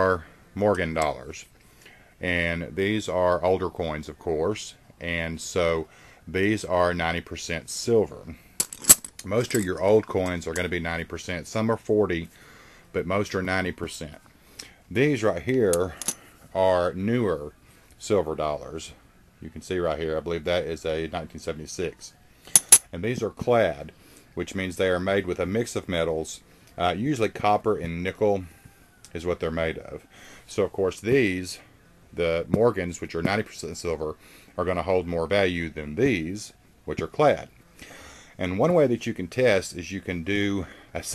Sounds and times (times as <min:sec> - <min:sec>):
Speech: 0:00.0 - 0:01.5, 0:02.2 - 0:08.4, 0:09.2 - 0:12.3, 0:12.9 - 0:14.2, 0:14.9 - 0:22.2, 0:22.9 - 0:28.5, 0:29.1 - 0:37.5, 0:38.4 - 0:41.1.